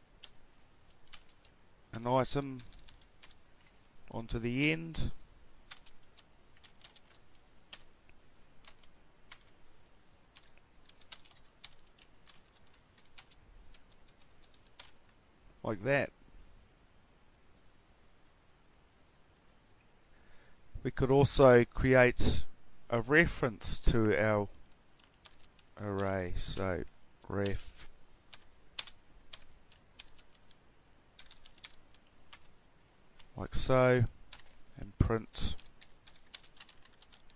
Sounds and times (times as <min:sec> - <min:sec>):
Computer keyboard: 0:00.2 - 0:01.6, 0:02.6 - 0:03.7, 0:05.7 - 0:07.9, 0:08.6 - 0:09.6, 0:10.3 - 0:15.0, 0:25.0 - 0:26.1, 0:28.3 - 0:30.6, 0:31.2 - 0:32.5, 0:34.3 - 0:34.6, 0:35.5 - 0:37.3.